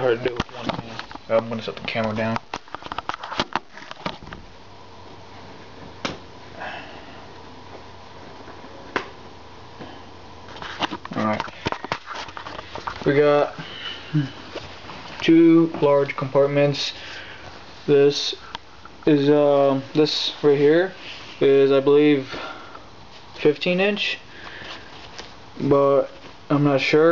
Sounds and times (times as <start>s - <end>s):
Speech: 0.0s - 2.4s, 13.0s - 13.6s, 15.2s - 17.0s, 17.9s - 18.4s, 19.0s - 22.5s, 23.4s - 24.2s, 25.6s - 27.1s.